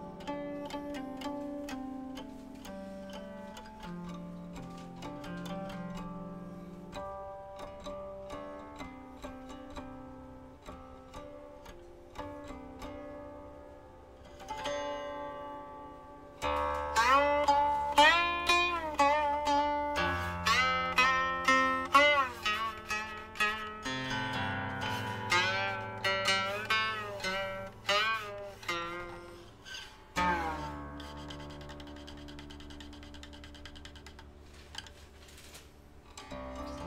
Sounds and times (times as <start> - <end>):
Zither: 0.0 - 36.8.